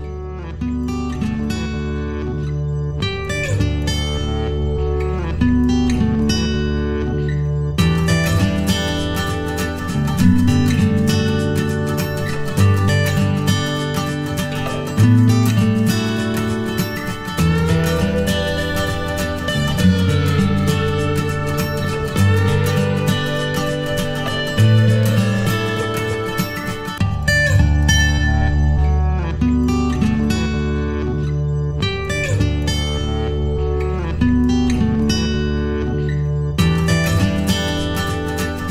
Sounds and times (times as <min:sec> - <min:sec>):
Music: 0:00.0 - 0:38.7.